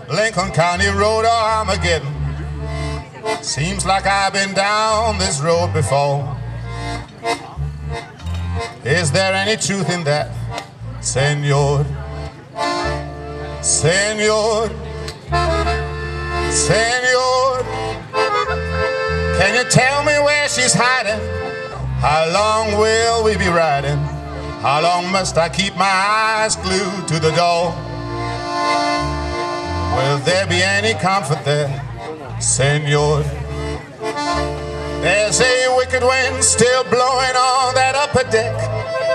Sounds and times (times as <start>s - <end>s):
Music: 0.1s - 39.1s.